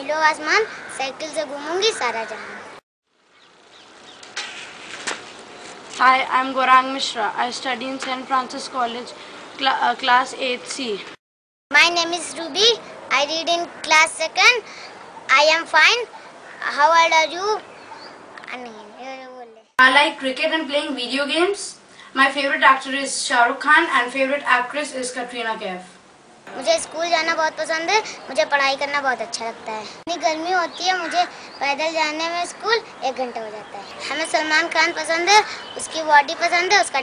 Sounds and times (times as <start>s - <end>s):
Speech: 6.0s - 11.1s, 18.5s - 37.0s.